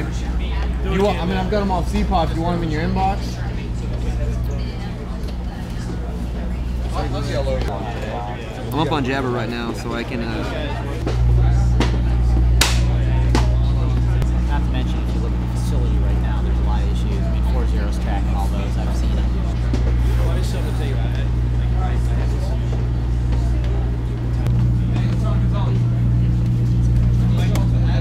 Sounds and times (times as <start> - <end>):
Speech: 0.0 - 28.0.